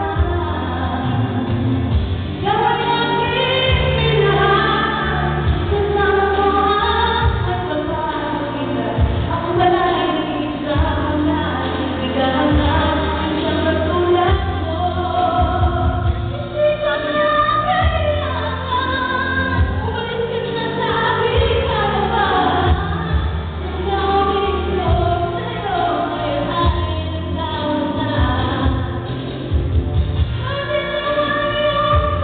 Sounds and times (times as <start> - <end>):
Female singing: 0.0 - 29.1, 30.4 - 32.2
Music: 0.0 - 32.2.